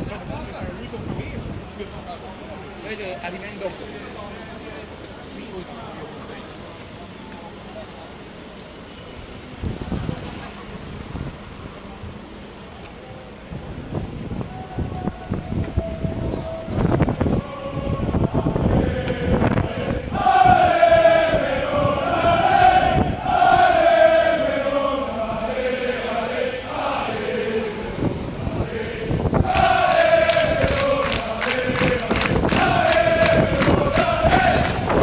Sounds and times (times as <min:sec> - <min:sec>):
Speech: 0:00.0 - 0:08.4
Outside, urban or manmade: 0:00.0 - 0:35.0.